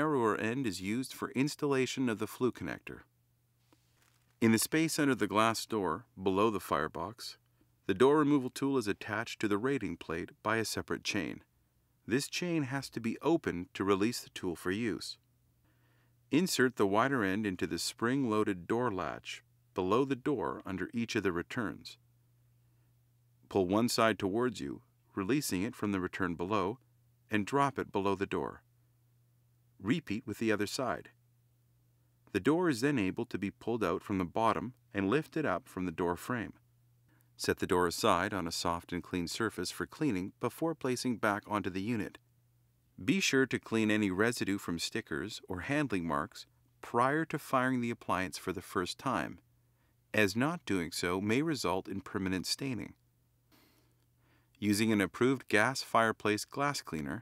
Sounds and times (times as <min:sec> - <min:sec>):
Speech: 0:00.0 - 0:03.1, 0:04.4 - 0:11.5, 0:12.1 - 0:15.2, 0:16.3 - 0:22.0, 0:23.5 - 0:28.6, 0:29.8 - 0:31.2, 0:32.3 - 0:36.6, 0:37.4 - 0:42.2, 0:43.0 - 0:49.4, 0:50.1 - 0:53.0, 0:54.6 - 0:57.2.